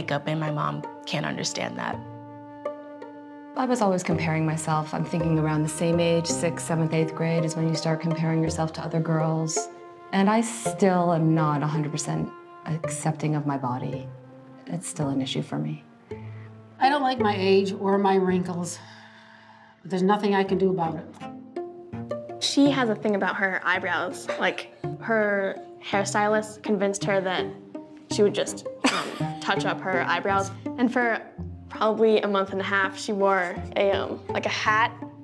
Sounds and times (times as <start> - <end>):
Music: 0.0 - 35.2.